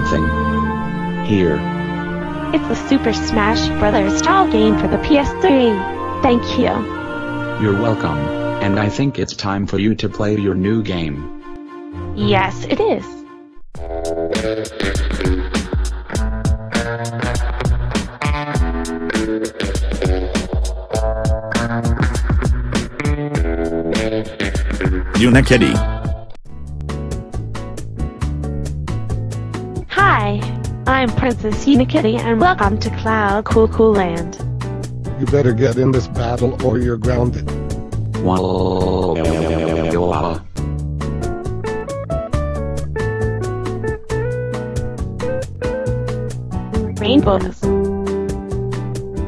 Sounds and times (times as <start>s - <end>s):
Speech: 0.0s - 0.4s, 1.3s - 1.6s, 2.6s - 6.8s, 7.6s - 11.2s, 12.2s - 13.2s, 25.2s - 25.8s, 29.9s - 34.4s, 35.2s - 37.4s, 38.2s - 40.4s, 47.0s - 47.7s
Music: 0.0s - 49.2s.